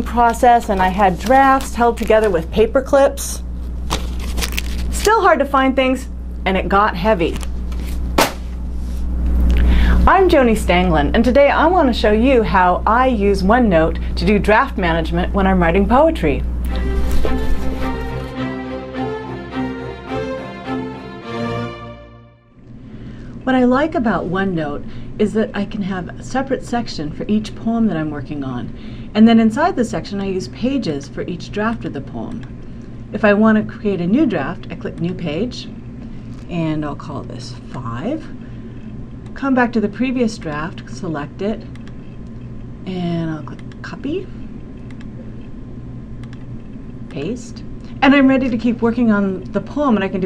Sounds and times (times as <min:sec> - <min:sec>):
Speech: 0:00.0 - 0:03.4, 0:05.0 - 0:07.4, 0:10.0 - 0:16.4, 0:23.4 - 0:32.4, 0:33.1 - 0:35.8, 0:36.5 - 0:38.4, 0:39.4 - 0:41.7, 0:42.9 - 0:44.4, 0:47.1 - 0:50.2
Music: 0:16.6 - 0:22.6.